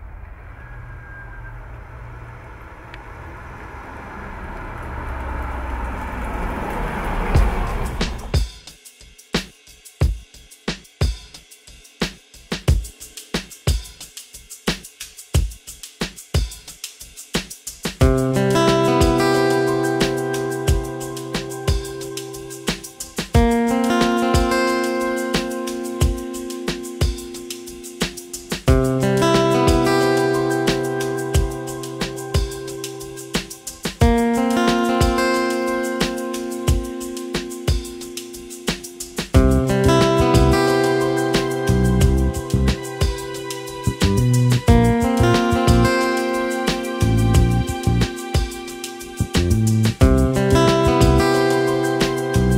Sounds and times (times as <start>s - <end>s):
Car: 0.0s - 8.4s
Music: 7.3s - 52.5s.